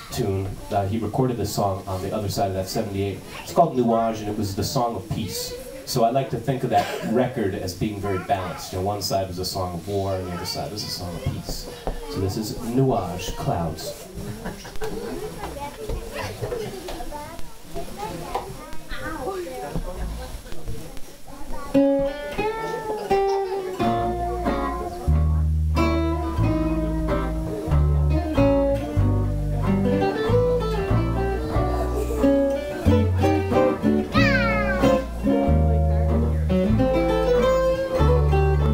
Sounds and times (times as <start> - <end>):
Speech: 0.0 - 21.6.